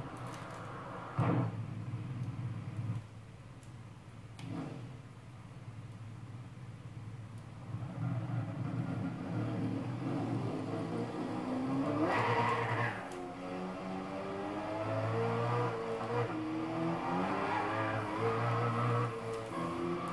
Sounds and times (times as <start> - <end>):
Vehicle: 0.0 - 20.1.